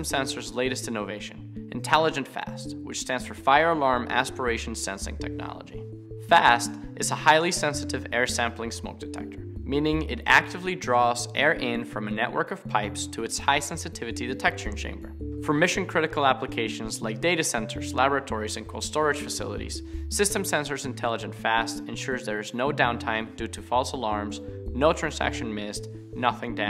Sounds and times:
Music: 0:00.0 - 0:26.6
Speech: 0:00.0 - 0:26.6.

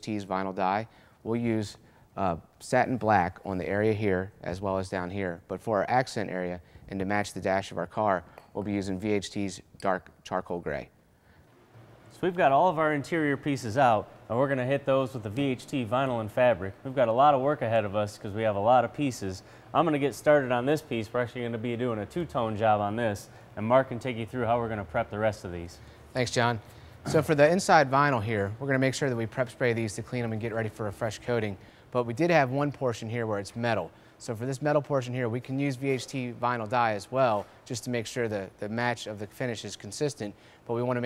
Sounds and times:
Speech: 0:00.0 - 0:10.9, 0:12.2 - 0:41.0.

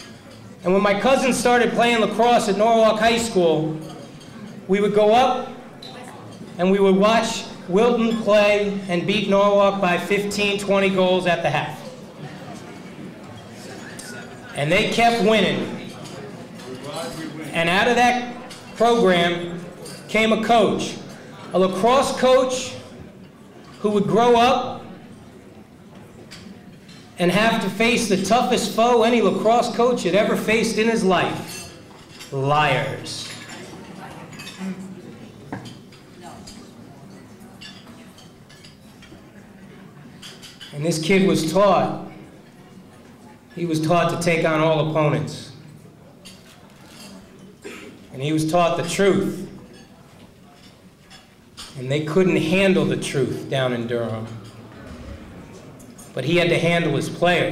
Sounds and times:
Male speech, man speaking: 0:00.6 - 0:03.9, 0:04.7 - 0:05.6, 0:06.6 - 0:12.0, 0:14.0 - 0:22.9, 0:23.8 - 0:25.0, 0:27.2 - 0:31.7, 0:32.3 - 0:33.4, 0:40.7 - 0:42.2, 0:43.6 - 0:45.6, 0:48.1 - 0:49.6, 0:51.8 - 0:54.4, 0:56.1 - 0:57.5.

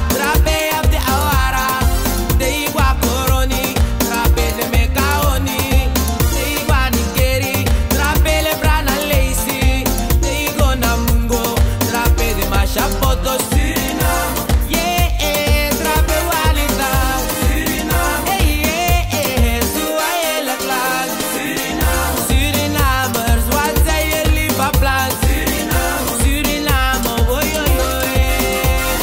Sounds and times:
Pop music: 0:00.0 - 0:29.0.

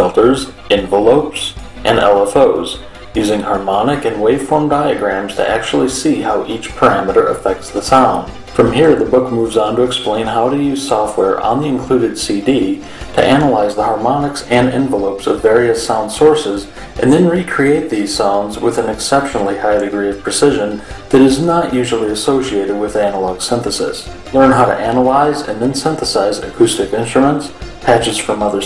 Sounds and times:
Music: 0:00.0 - 0:28.6
Speech: 0:00.0 - 0:28.6.

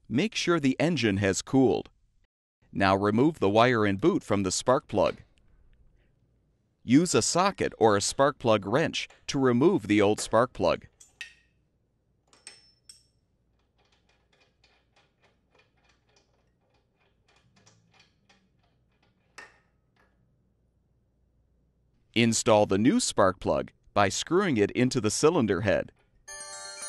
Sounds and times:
Speech: 0:00.1 - 0:01.9, 0:02.8 - 0:05.2, 0:06.9 - 0:10.9, 0:22.2 - 0:26.0.

